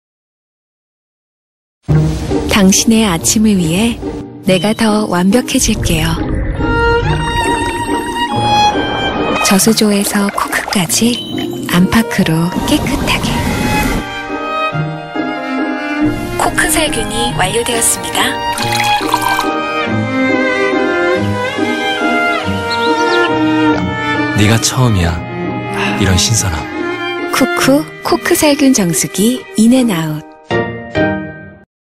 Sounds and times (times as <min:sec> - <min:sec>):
Music: 0:01.8 - 0:31.7
Speech: 0:02.5 - 0:06.2, 0:24.4 - 0:25.2, 0:27.4 - 0:30.2.